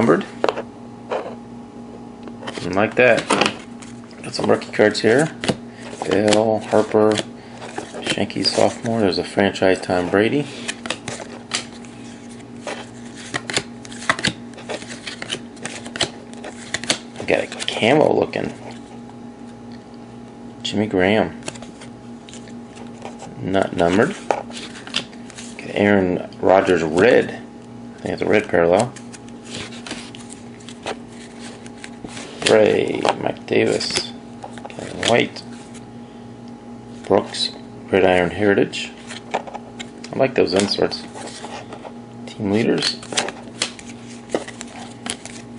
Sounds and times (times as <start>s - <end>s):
Speech: 0.0s - 0.3s, 2.6s - 3.3s, 4.2s - 5.4s, 6.1s - 7.2s, 8.2s - 10.5s, 17.2s - 18.6s, 20.6s - 21.4s, 23.4s - 24.2s, 25.6s - 29.0s, 32.5s - 34.2s, 34.8s - 35.5s, 37.1s - 39.0s, 40.1s - 41.1s, 42.3s - 43.0s.